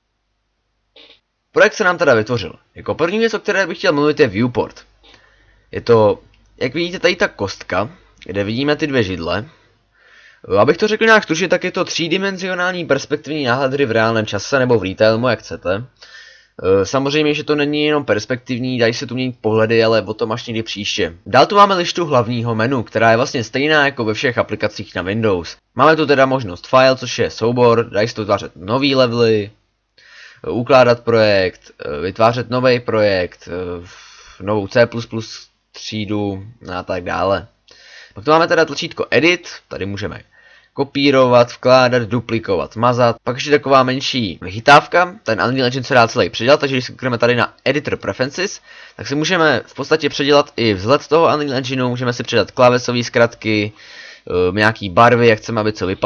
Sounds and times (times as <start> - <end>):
Speech: 1.0 - 4.9, 5.8 - 9.6, 10.4 - 15.9, 16.6 - 29.6, 30.4 - 37.5, 38.2 - 56.0.